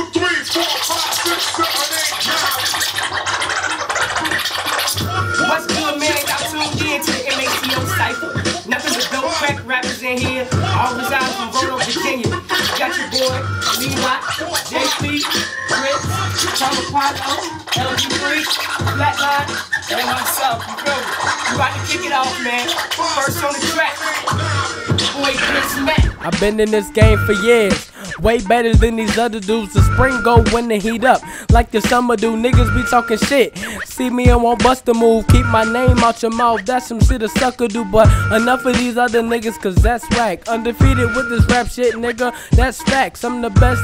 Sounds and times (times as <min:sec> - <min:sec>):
Rapping: 0:00.0 - 0:03.1, 0:04.9 - 0:43.8
Hip hop music: 0:00.0 - 0:43.8
Inside, small room: 0:00.0 - 0:43.8
Scratching (performance technique): 0:00.0 - 0:43.8.